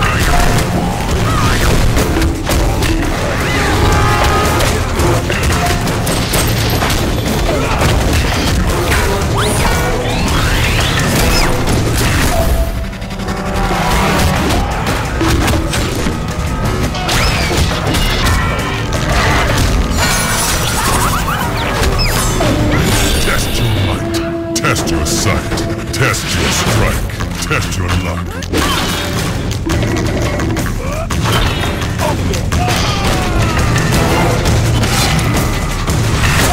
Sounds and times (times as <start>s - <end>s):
Speech: 23.1s - 28.4s.